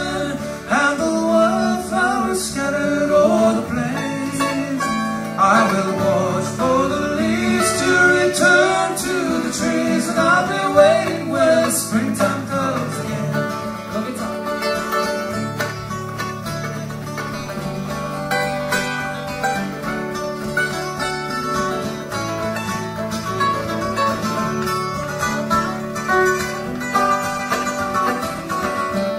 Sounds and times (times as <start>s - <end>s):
Bluegrass: 0.0s - 29.1s
Guitar: 0.0s - 29.1s.